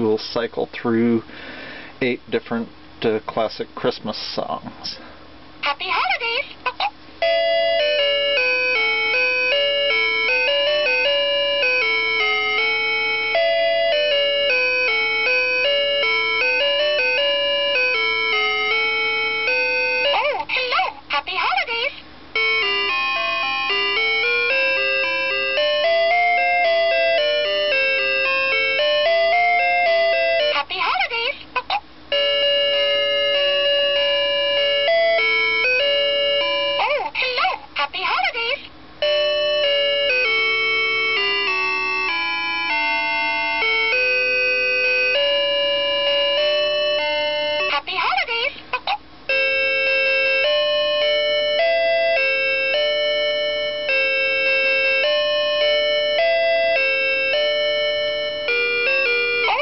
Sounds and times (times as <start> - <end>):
Speech: 0.0 - 1.2, 2.0 - 5.0, 5.6 - 6.9, 20.2 - 22.0, 30.5 - 31.8, 36.8 - 38.7, 47.6 - 48.6.